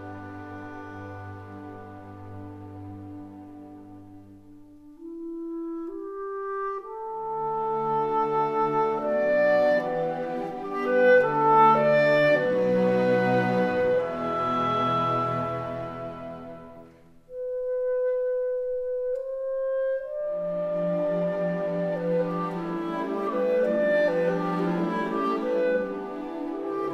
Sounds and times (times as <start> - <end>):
Music: 0.0 - 26.9.